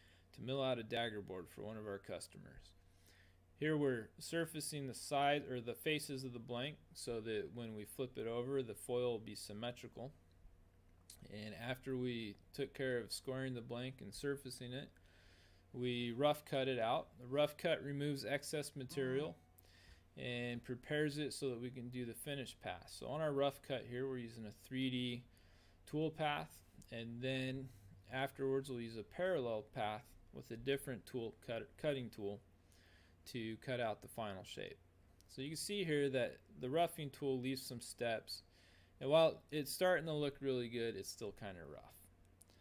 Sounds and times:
Speech: 0:00.3 - 0:02.8, 0:03.6 - 0:10.2, 0:11.1 - 0:15.0, 0:15.7 - 0:19.4, 0:20.2 - 0:32.4, 0:33.2 - 0:42.1.

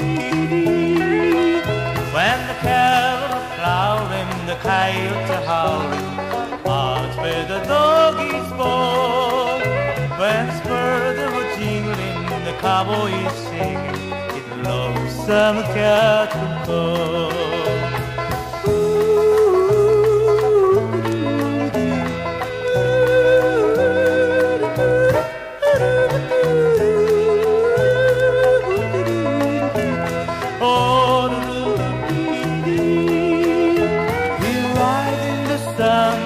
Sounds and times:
Music: 0:00.0 - 0:36.2.

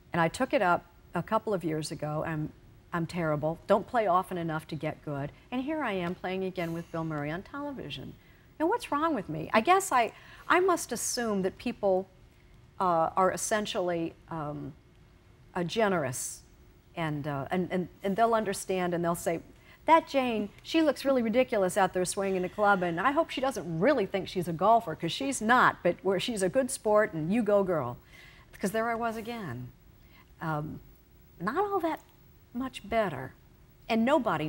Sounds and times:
Speech: 0:00.2 - 0:12.1, 0:17.0 - 0:28.0, 0:28.6 - 0:29.7, 0:31.4 - 0:34.4.

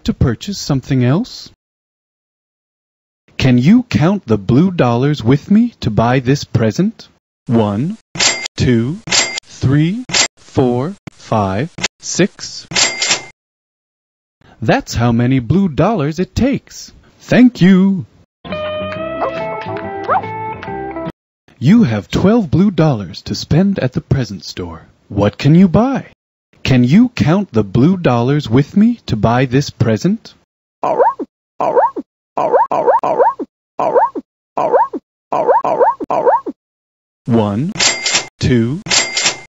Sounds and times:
Speech synthesizer: 0:00.0 - 0:01.6, 0:03.4 - 0:08.0, 0:09.6 - 0:12.7, 0:14.6 - 0:18.1, 0:21.6 - 0:30.4, 0:37.3 - 0:37.8
Cash register: 0:08.2 - 0:09.5, 0:12.7 - 0:13.4, 0:37.8 - 0:39.5.

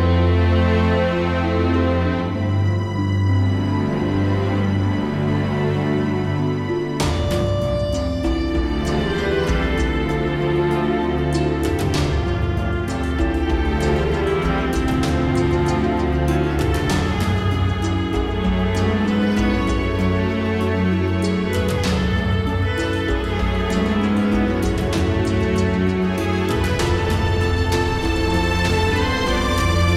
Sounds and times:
Sad music: 0:00.0 - 0:29.9.

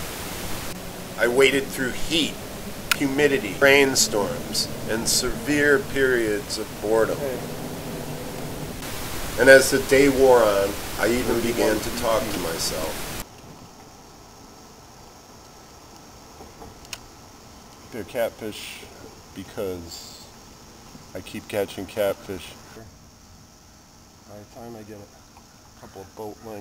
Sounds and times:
Speech: 0:01.2 - 0:02.4, 0:03.0 - 0:07.4, 0:09.4 - 0:13.0, 0:17.9 - 0:20.4, 0:21.1 - 0:22.9, 0:24.3 - 0:25.1, 0:25.8 - 0:26.6.

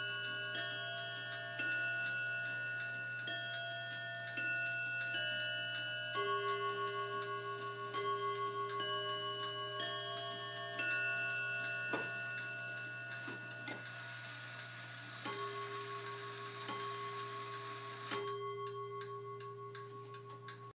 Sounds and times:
Clock: 0:00.0 - 0:20.7.

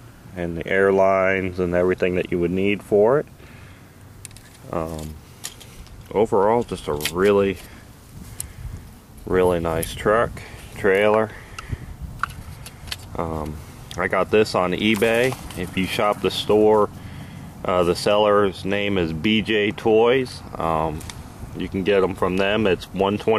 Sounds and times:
Speech: 0:00.4 - 0:03.3, 0:04.7 - 0:05.2, 0:06.1 - 0:07.6, 0:09.3 - 0:11.4, 0:13.2 - 0:16.9, 0:17.6 - 0:21.0, 0:21.6 - 0:23.3.

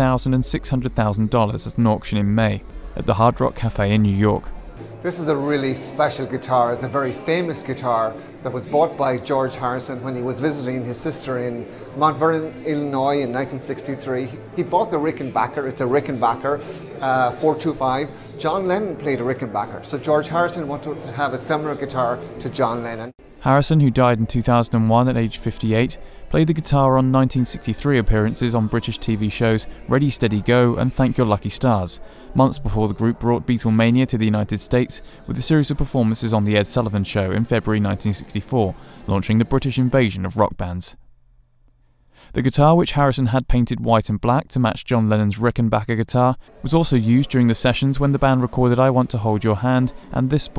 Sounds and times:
Speech: 0:00.0 - 0:41.0, 0:42.3 - 0:50.5.

